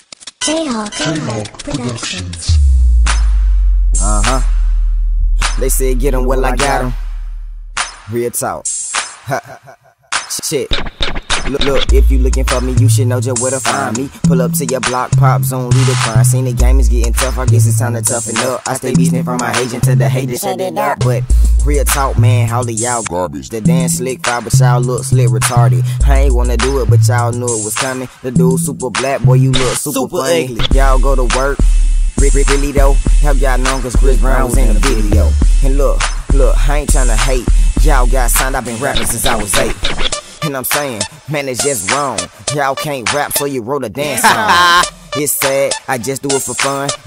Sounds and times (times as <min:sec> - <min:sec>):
Music: 0:00.2 - 0:09.5, 0:10.1 - 0:47.0.